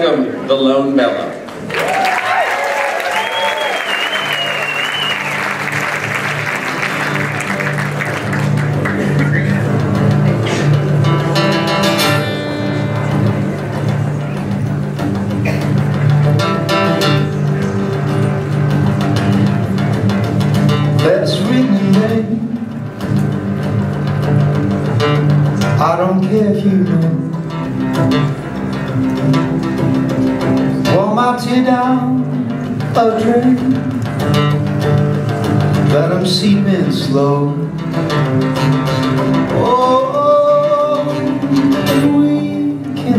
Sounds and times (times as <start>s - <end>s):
Music: 2.9s - 43.1s.